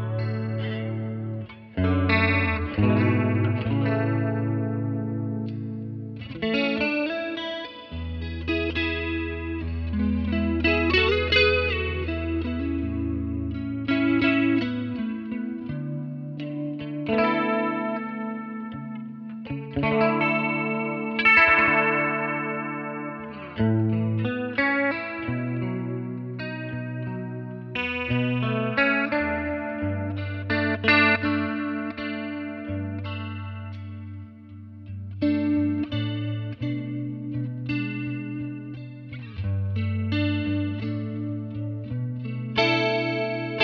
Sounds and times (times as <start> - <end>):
Electric guitar: 0.0 - 43.6.